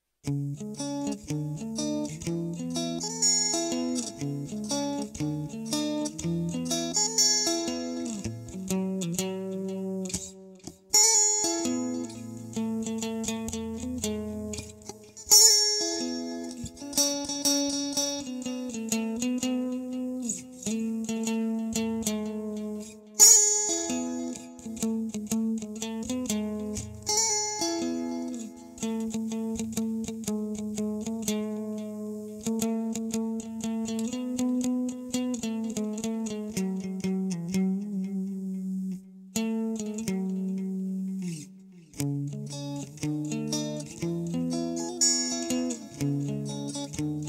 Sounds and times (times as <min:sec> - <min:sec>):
Acoustic guitar: 0:21.6 - 0:47.2.